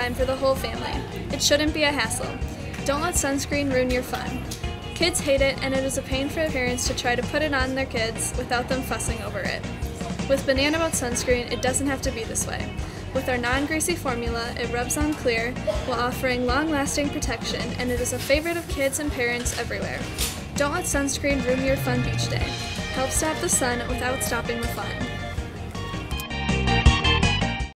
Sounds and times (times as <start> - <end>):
Music: 0.0 - 27.7
Speech: 13.2 - 25.1.